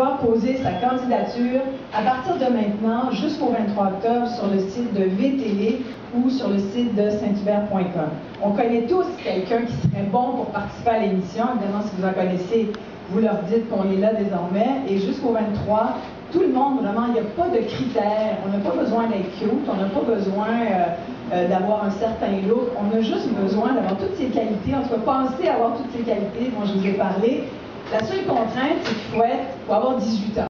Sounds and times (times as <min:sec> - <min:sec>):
Speech: 0:00.0 - 0:30.4.